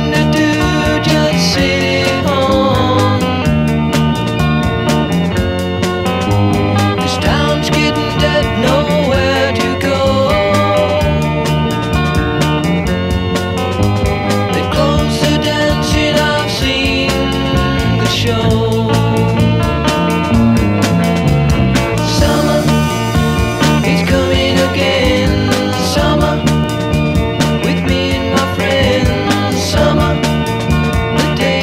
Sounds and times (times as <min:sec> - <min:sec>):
Music: 0:00.0 - 0:31.6.